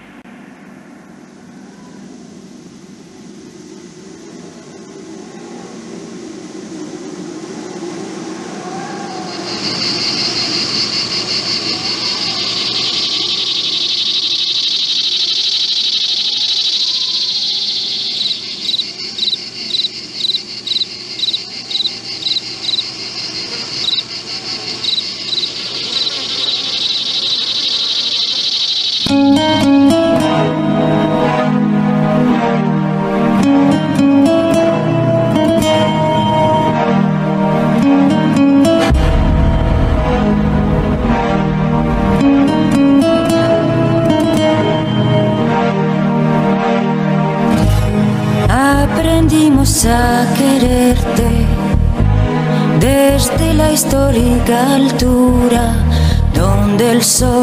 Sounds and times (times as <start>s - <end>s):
Cricket: 0.0s - 30.3s
Fly, housefly: 9.1s - 29.6s.